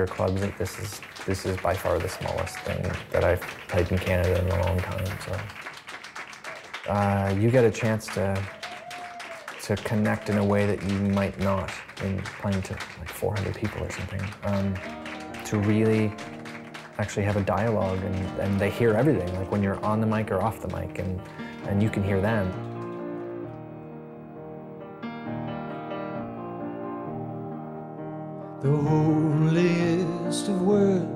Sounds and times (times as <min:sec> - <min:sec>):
Speech: 0:00.0 - 0:05.5, 0:06.9 - 0:08.5, 0:09.6 - 0:14.8, 0:15.4 - 0:16.2, 0:17.0 - 0:22.6
Music: 0:00.0 - 0:31.1.